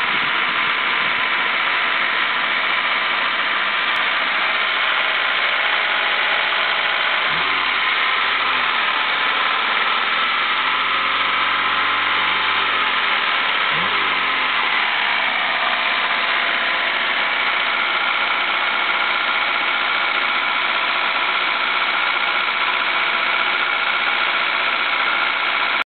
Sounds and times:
Heavy engine (low frequency): 0:00.0 - 0:25.8
Idling: 0:00.0 - 0:25.8
Medium engine (mid frequency): 0:00.0 - 0:25.8
Vehicle: 0:00.0 - 0:25.8.

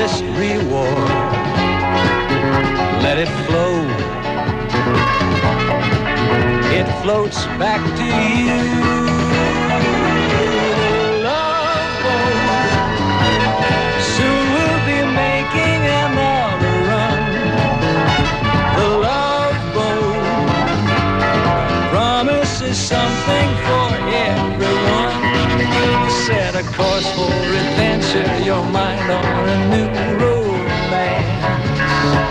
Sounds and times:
Music: 0:00.0 - 0:32.3.

